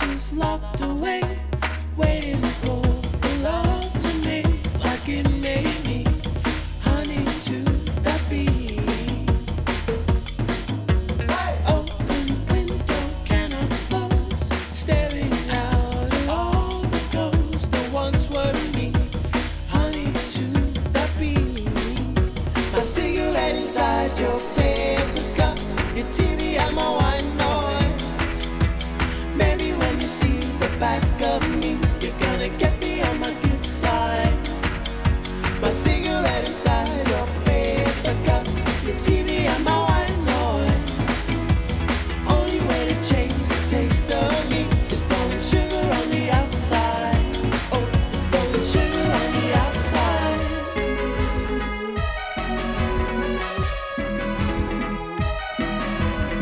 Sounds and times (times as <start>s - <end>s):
Singing: 0.0s - 9.5s, 11.3s - 52.5s
Music: 0.0s - 56.4s.